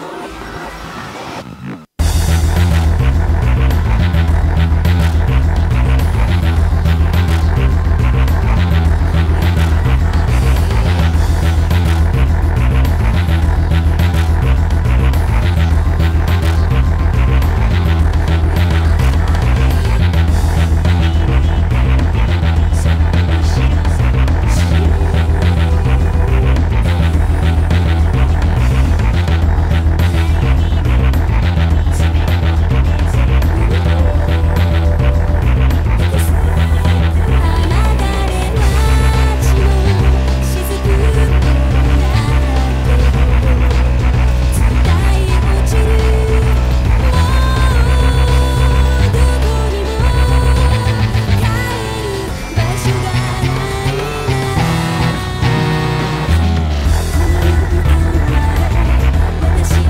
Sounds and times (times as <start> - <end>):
Bass guitar: 2.0 - 59.9.